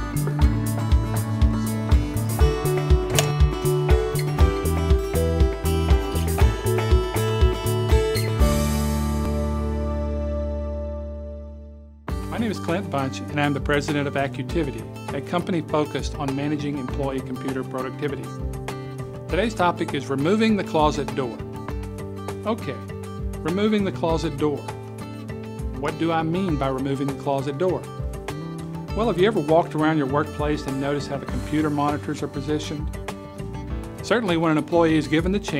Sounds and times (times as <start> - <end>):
Music: 0.0 - 35.5
Speech: 12.3 - 18.4, 19.3 - 21.4, 22.4 - 24.7, 25.8 - 27.9, 29.0 - 32.9, 34.0 - 35.5.